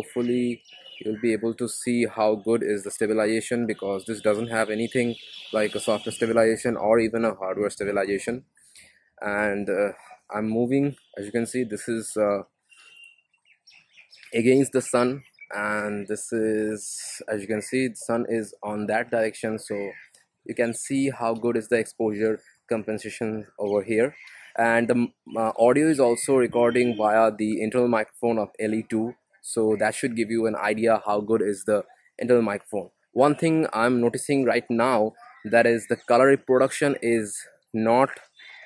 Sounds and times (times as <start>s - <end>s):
Speech: 0.0s - 8.4s, 9.2s - 12.4s, 14.4s - 38.2s.